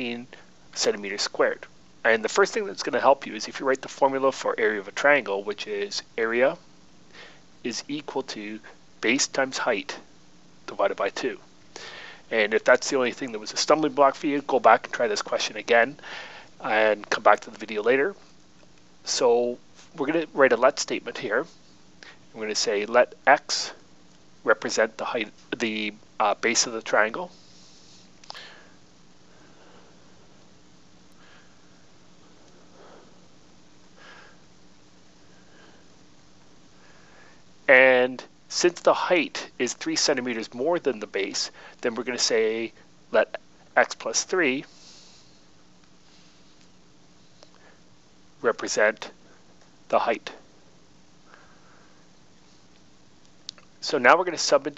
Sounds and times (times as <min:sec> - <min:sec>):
Speech: 0:00.0 - 0:06.6, 0:07.6 - 0:10.1, 0:10.7 - 0:11.4, 0:12.3 - 0:16.0, 0:16.6 - 0:18.2, 0:19.1 - 0:21.5, 0:22.4 - 0:23.8, 0:24.5 - 0:27.4, 0:37.7 - 0:44.7, 0:48.4 - 0:49.2, 0:49.9 - 0:50.4, 0:53.8 - 0:54.7.